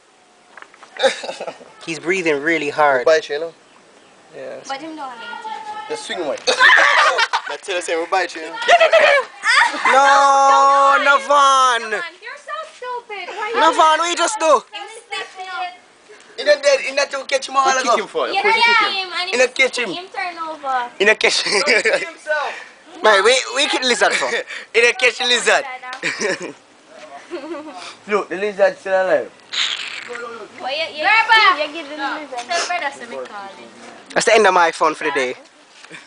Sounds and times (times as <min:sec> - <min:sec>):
Outside, rural or natural: 0:00.0 - 0:36.0.